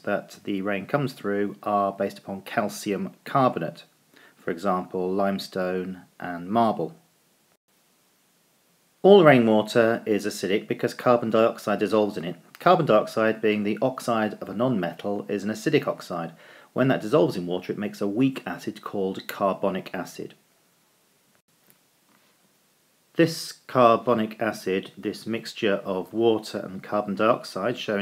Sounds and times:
Speech: 0.0 - 7.0, 9.0 - 20.4, 23.2 - 28.0.

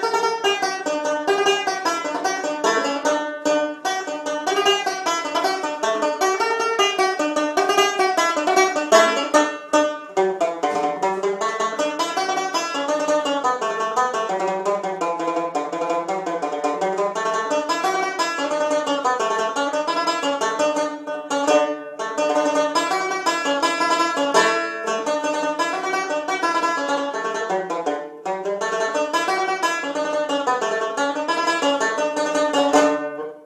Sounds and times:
Banjo: 0.0 - 33.4.

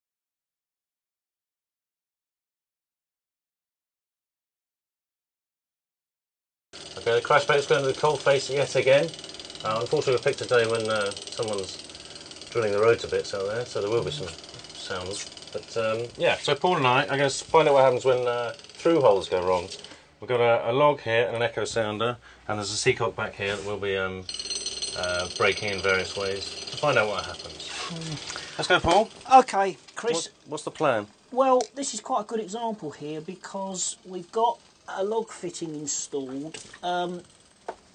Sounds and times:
Speech: 12.6 - 24.3, 25.0 - 37.3.

